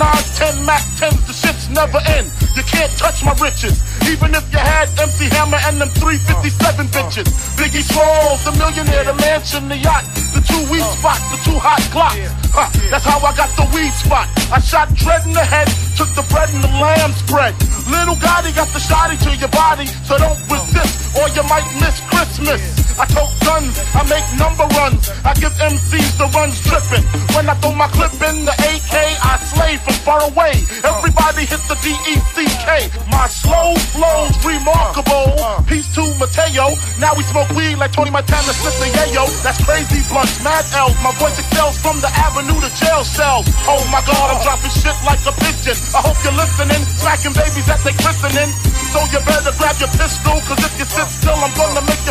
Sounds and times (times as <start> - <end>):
Hip hop music: 0.0 - 52.1
Rapping: 0.0 - 52.1.